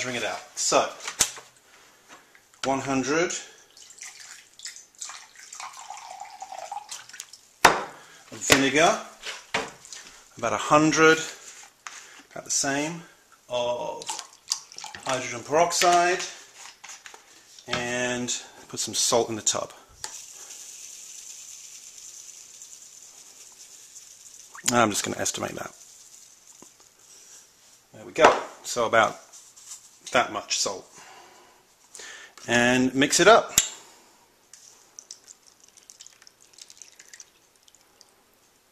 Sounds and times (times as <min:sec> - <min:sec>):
Speech: 0:00.0 - 0:01.0, 0:02.6 - 0:03.5, 0:08.3 - 0:09.2, 0:10.4 - 0:11.4, 0:12.4 - 0:14.2, 0:15.0 - 0:16.4, 0:17.7 - 0:19.8, 0:24.7 - 0:25.8, 0:27.9 - 0:29.3, 0:30.1 - 0:30.9, 0:32.5 - 0:33.6.